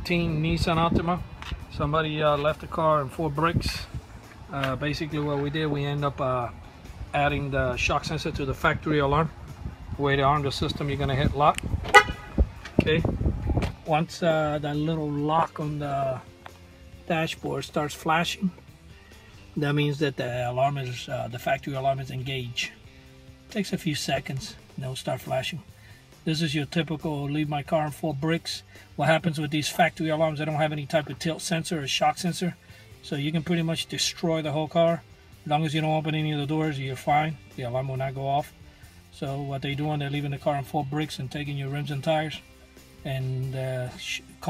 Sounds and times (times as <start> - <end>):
Speech: 0.0 - 3.9, 4.5 - 6.5, 7.1 - 9.3, 10.0 - 11.6, 13.8 - 16.2, 17.1 - 18.6, 19.6 - 22.8, 23.5 - 25.6, 26.3 - 38.5, 39.2 - 42.4, 43.0 - 44.5
Music: 0.0 - 44.5.